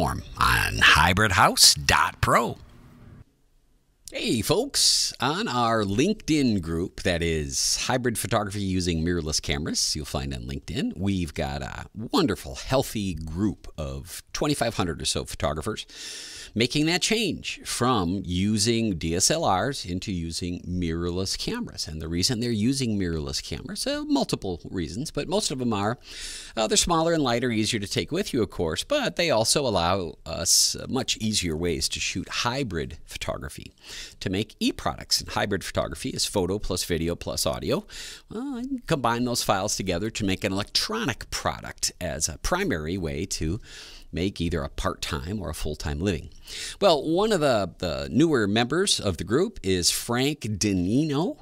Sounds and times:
Speech: 0:00.0 - 0:02.6, 0:04.1 - 0:15.9, 0:16.5 - 0:26.0, 0:26.6 - 0:51.4.

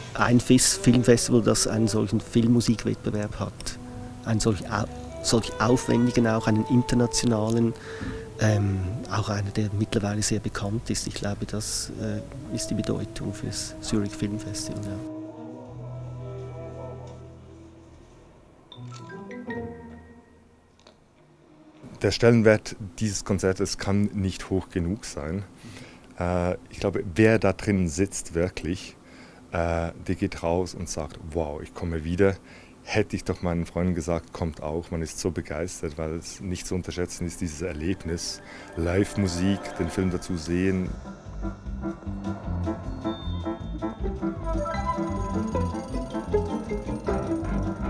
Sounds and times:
Tender music: 0:00.0 - 0:20.7, 0:37.4 - 0:47.8
Speech: 0:00.2 - 0:07.8, 0:08.4 - 0:15.1, 0:22.0 - 0:25.5, 0:26.2 - 0:29.0, 0:29.6 - 0:41.0
Orchestra: 0:12.2 - 0:20.3, 0:37.5 - 0:47.8.

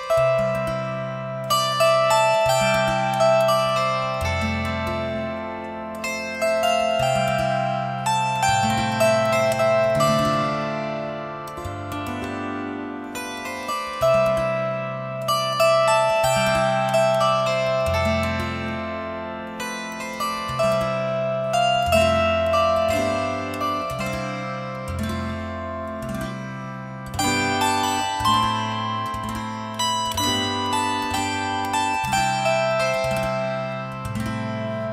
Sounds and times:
Zither: 0:00.0 - 0:34.9.

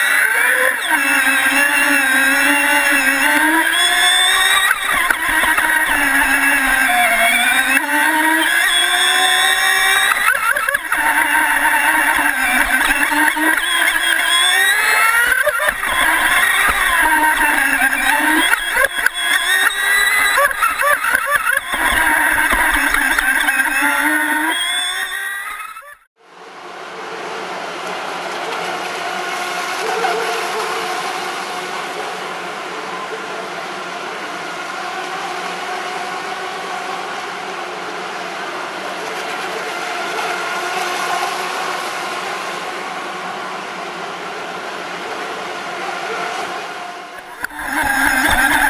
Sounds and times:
Motorboat, speedboat: 0:00.0 - 0:26.1, 0:27.0 - 0:48.6.

